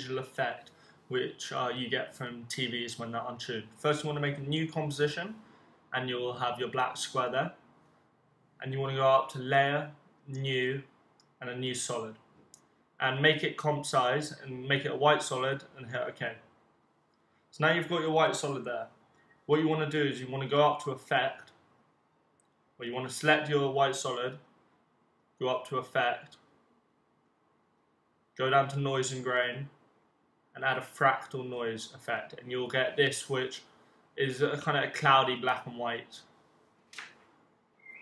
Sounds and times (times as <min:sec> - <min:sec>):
Speech: 0:00.0 - 0:07.6, 0:08.6 - 0:12.2, 0:13.0 - 0:16.4, 0:17.6 - 0:18.9, 0:19.5 - 0:21.5, 0:22.8 - 0:24.4, 0:25.4 - 0:26.4, 0:28.4 - 0:29.8, 0:30.6 - 0:36.3.